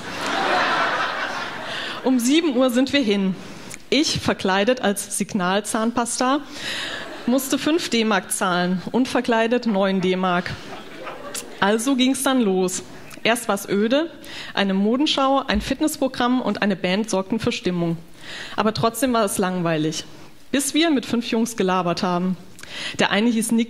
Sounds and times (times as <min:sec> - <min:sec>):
Speech: 0:02.0 - 0:06.5, 0:07.3 - 0:10.6, 0:11.4 - 0:18.0, 0:18.6 - 0:22.4, 0:23.0 - 0:23.7.